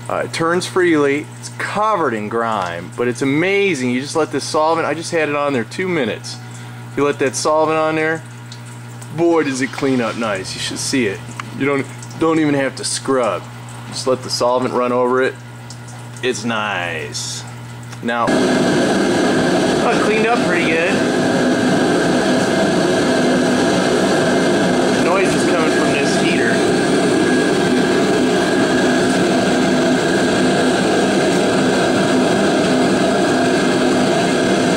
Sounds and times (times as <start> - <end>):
Engine: 0.0 - 8.3, 18.1 - 34.7
Speech: 0.1 - 6.4, 7.0 - 8.3, 9.1 - 15.4, 16.2 - 18.3, 19.8 - 21.0, 25.0 - 26.6.